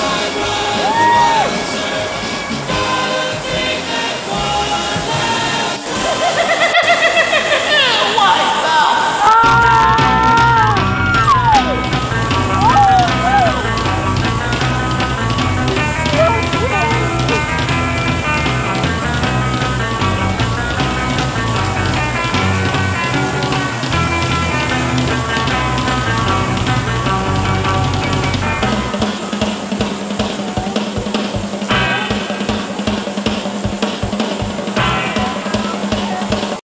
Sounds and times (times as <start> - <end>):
Music: 0.0 - 7.0, 9.3 - 36.6
Speech: 7.8 - 9.4, 16.1 - 17.4, 35.1 - 36.6.